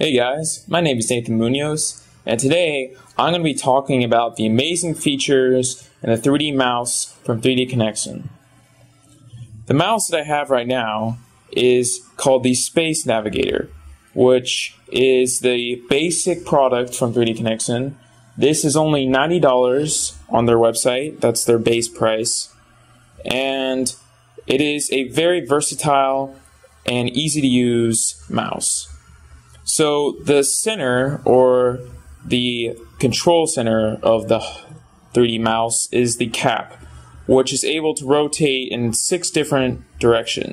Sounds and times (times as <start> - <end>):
Speech: 0.0 - 40.5.